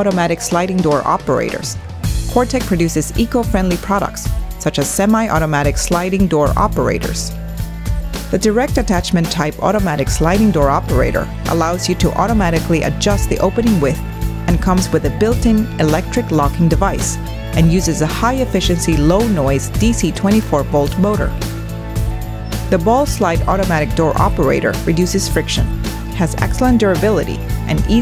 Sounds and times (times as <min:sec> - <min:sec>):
Speech: 0:00.0 - 0:07.3, 0:08.4 - 0:21.4, 0:22.7 - 0:28.0
Music: 0:00.0 - 0:28.0.